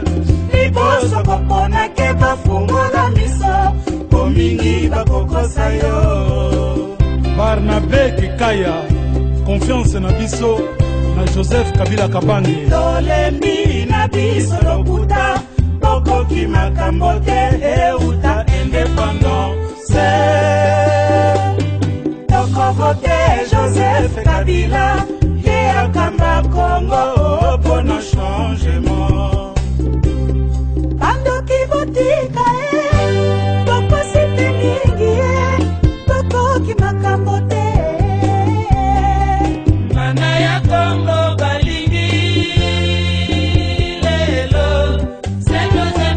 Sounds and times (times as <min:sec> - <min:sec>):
Music: 0:00.0 - 0:46.1.